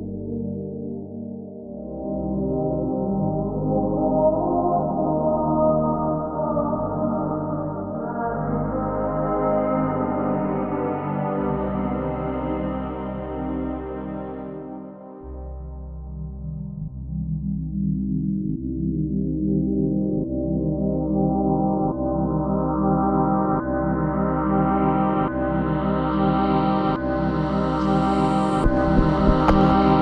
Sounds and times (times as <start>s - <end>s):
Electronic music: 26.7s - 30.0s.